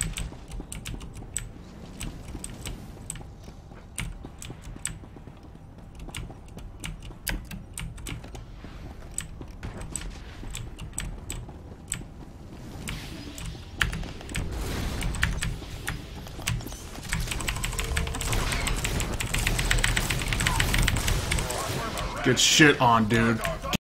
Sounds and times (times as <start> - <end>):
Speech: 21.5 - 23.8.